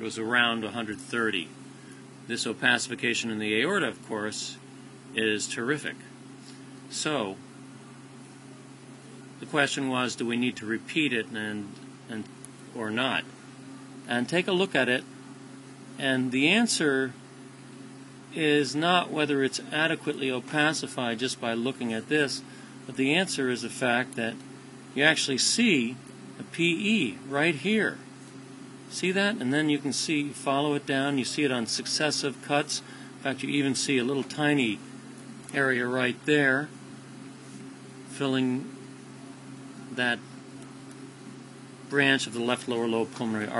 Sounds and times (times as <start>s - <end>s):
Speech: 0.0s - 1.6s, 2.3s - 6.1s, 6.9s - 7.4s, 9.4s - 13.3s, 14.1s - 15.1s, 16.0s - 17.2s, 18.3s - 24.4s, 25.0s - 28.0s, 28.9s - 34.9s, 35.5s - 36.8s, 38.1s - 38.8s, 39.9s - 40.3s, 41.9s - 43.5s.